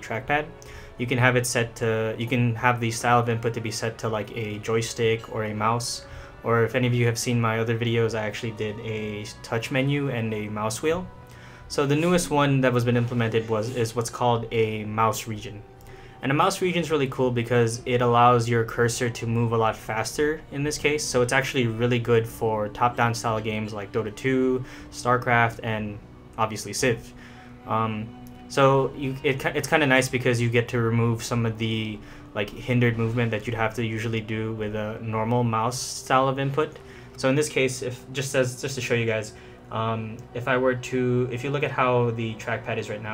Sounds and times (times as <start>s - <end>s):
Speech: 0.0s - 11.1s, 11.7s - 15.6s, 16.2s - 43.1s
Music: 0.0s - 43.1s.